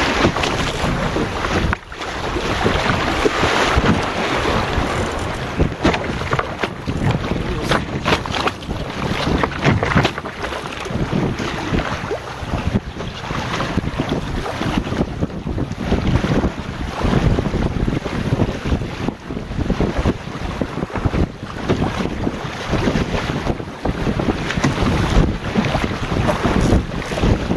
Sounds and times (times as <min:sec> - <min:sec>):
Wind noise (microphone): 0:00.0 - 0:27.5.